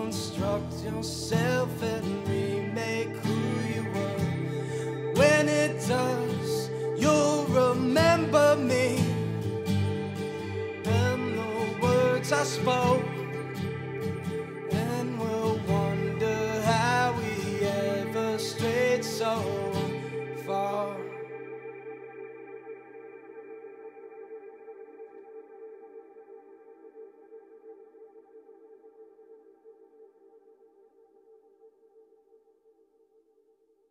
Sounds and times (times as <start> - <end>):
Music: 0.0 - 32.5.